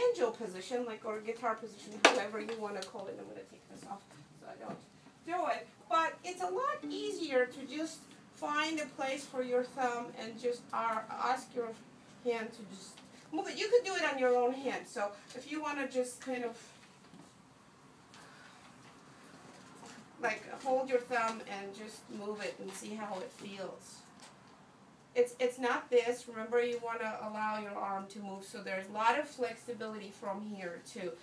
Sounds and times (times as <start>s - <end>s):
Speech: 0.0s - 16.8s, 20.2s - 24.1s, 25.2s - 31.2s.